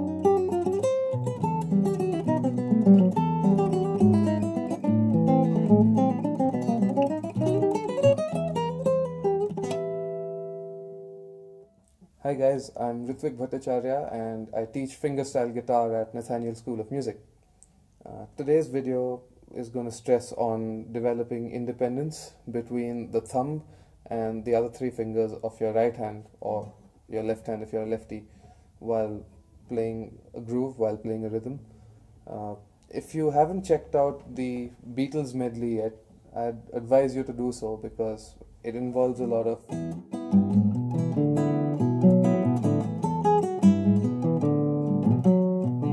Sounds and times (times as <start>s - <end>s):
Speech: 12.2s - 17.2s, 18.0s - 31.6s, 32.3s - 39.7s.